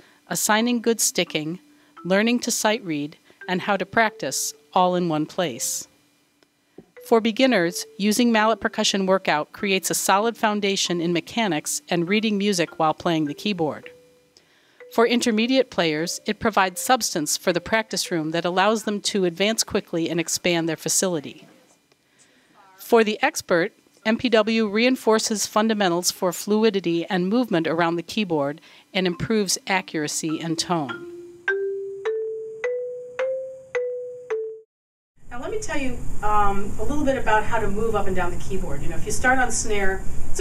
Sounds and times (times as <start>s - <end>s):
Speech: 0.3s - 5.9s, 7.1s - 13.8s, 15.0s - 21.7s, 22.6s - 30.9s, 35.3s - 40.4s
Percussion: 30.2s - 34.6s.